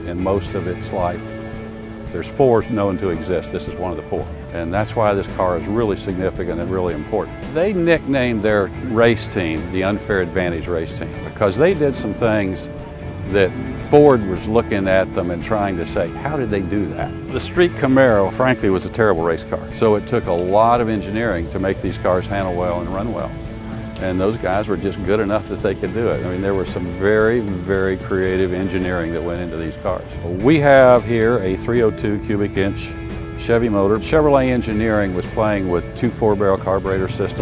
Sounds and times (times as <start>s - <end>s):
Speech: 0.0s - 1.2s, 2.1s - 12.7s, 13.3s - 23.3s, 24.0s - 37.4s
Music: 0.0s - 37.4s.